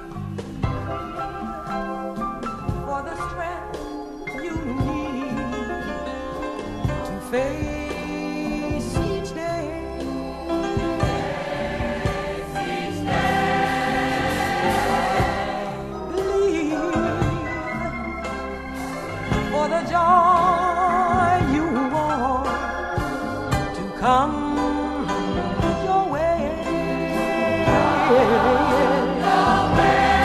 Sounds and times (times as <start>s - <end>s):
Choir: 10.5s - 18.0s, 26.9s - 30.2s.